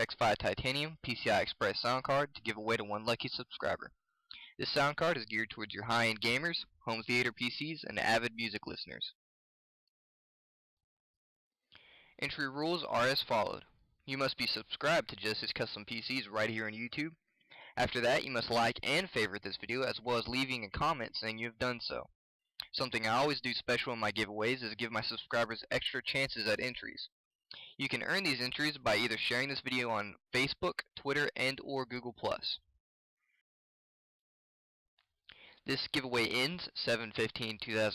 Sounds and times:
Speech: 0.0s - 9.2s, 12.2s - 32.7s, 35.6s - 37.9s.

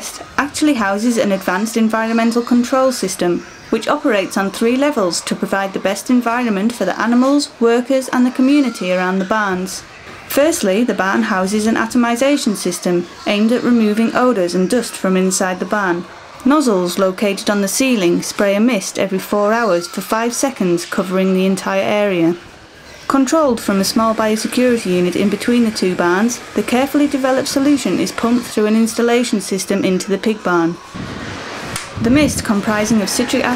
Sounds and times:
Speech: 0.0s - 22.5s, 23.1s - 30.8s, 32.0s - 33.5s.

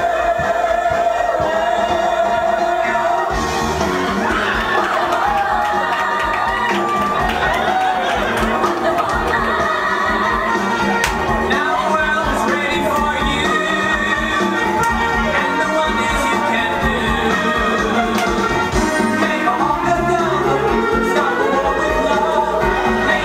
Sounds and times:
Music of Latin America: 0.0s - 23.2s.

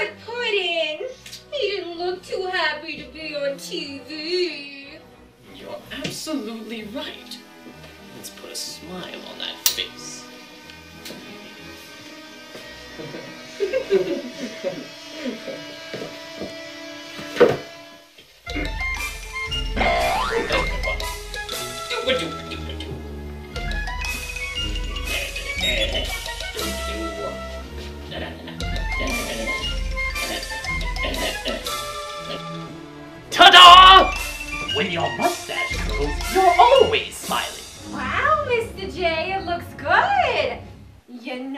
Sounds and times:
Music: 0.0s - 41.5s.

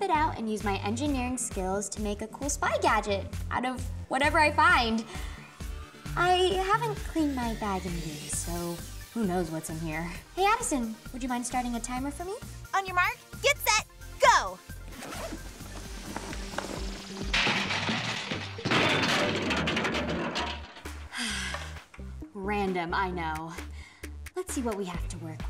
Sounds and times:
Speech: 0.0s - 5.0s, 6.2s - 14.6s, 22.4s - 23.6s, 24.4s - 25.5s
Music: 0.0s - 25.5s.

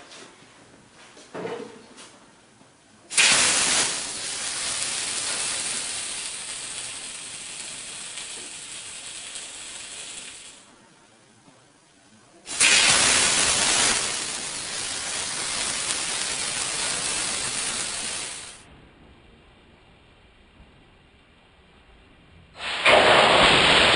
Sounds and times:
Fire: 3.1s - 10.7s, 12.4s - 23.9s.

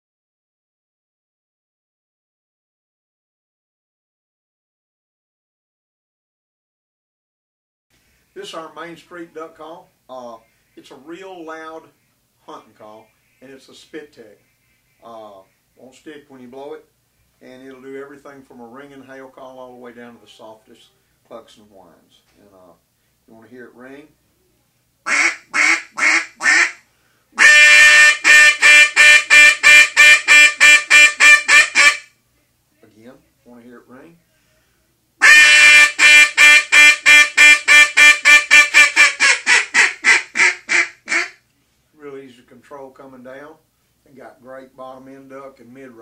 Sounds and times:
Speech: 8.4s - 14.4s, 15.0s - 24.7s, 32.4s - 34.6s, 42.0s - 46.0s
Quack: 25.1s - 26.8s, 27.4s - 32.1s, 35.2s - 41.4s.

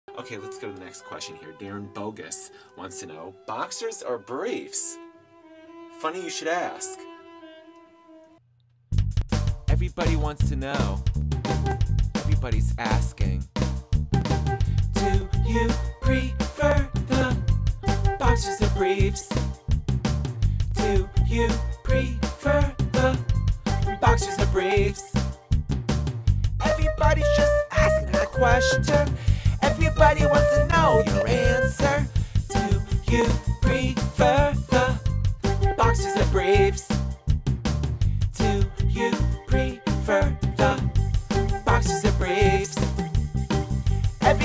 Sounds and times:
Speech: 0.1s - 5.0s, 6.0s - 7.0s, 9.7s - 11.1s, 12.2s - 13.5s, 18.2s - 19.4s, 29.6s - 31.8s.

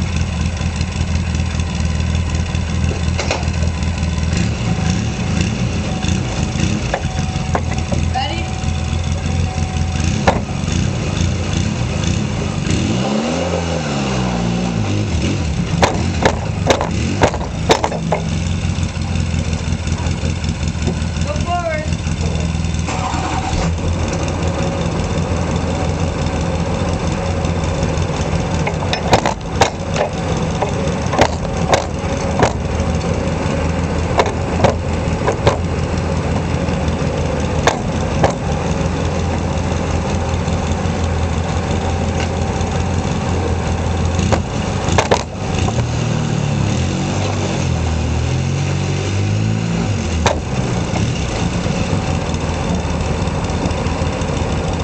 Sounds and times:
Truck: 0.0s - 54.8s.

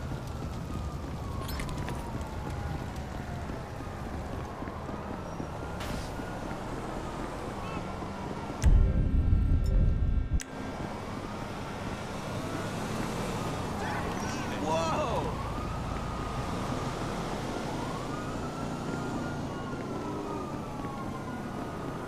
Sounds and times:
Car: 0.0s - 22.0s
Speech: 13.8s - 15.4s.

